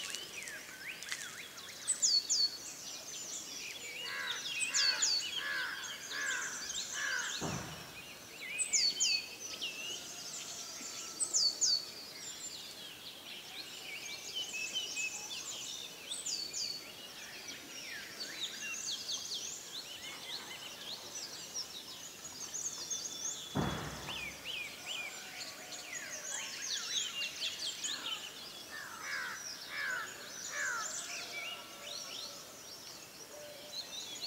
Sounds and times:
Bird vocalization, bird call, bird song: 0.0s - 34.2s.

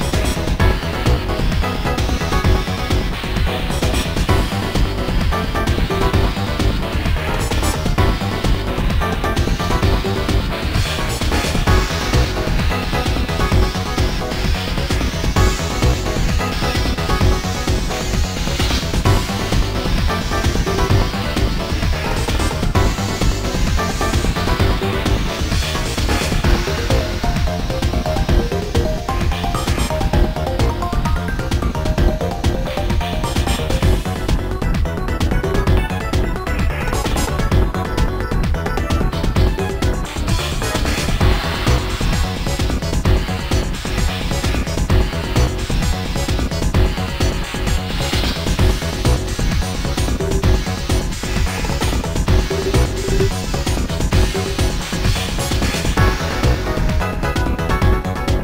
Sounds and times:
Music: 0.0s - 58.4s.

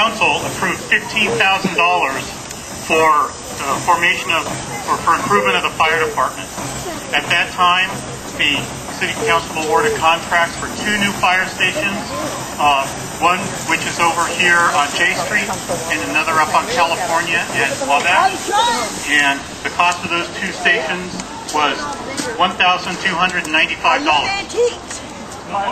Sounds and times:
Idling: 0.0s - 18.4s
Speech: 0.0s - 25.7s.

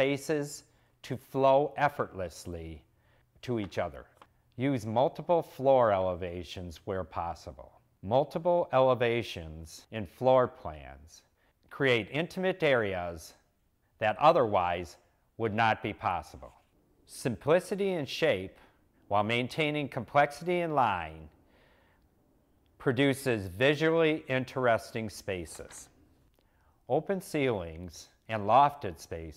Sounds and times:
Speech: 0.0s - 21.3s, 22.8s - 25.9s, 26.9s - 29.3s.

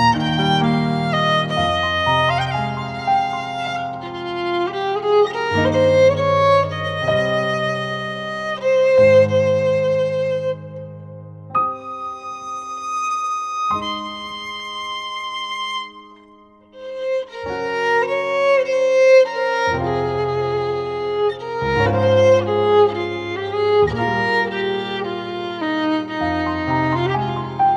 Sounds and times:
Violin, fiddle: 0.0s - 11.1s, 11.7s - 27.7s
Piano: 0.0s - 27.7s.

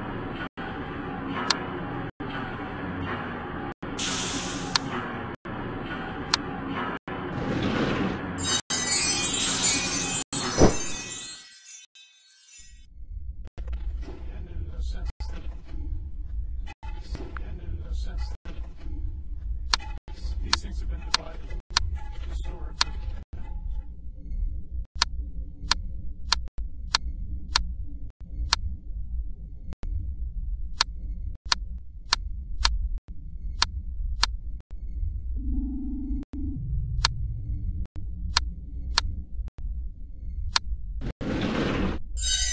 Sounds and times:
Sound effect: 0.0s - 14.3s, 33.4s - 42.5s.

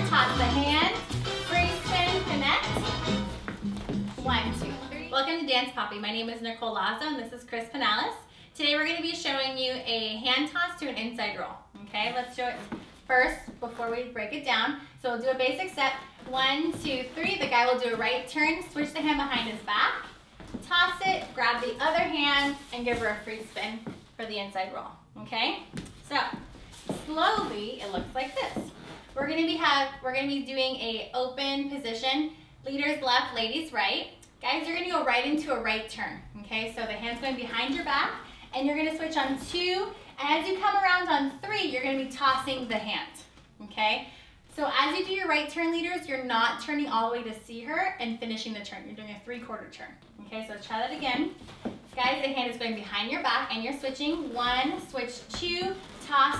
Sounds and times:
Speech: 0.0s - 2.8s, 4.2s - 51.4s, 52.0s - 56.4s.

